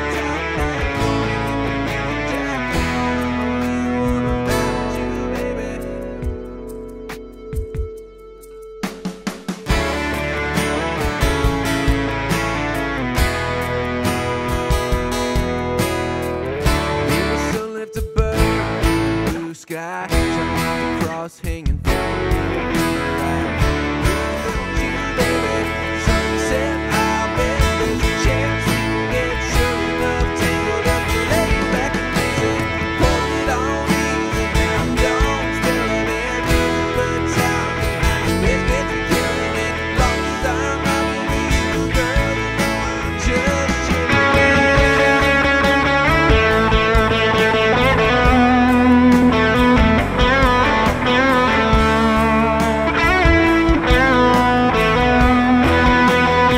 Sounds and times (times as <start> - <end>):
Strum: 0.0 - 19.5, 20.1 - 56.5
Acoustic guitar: 0.0 - 56.5.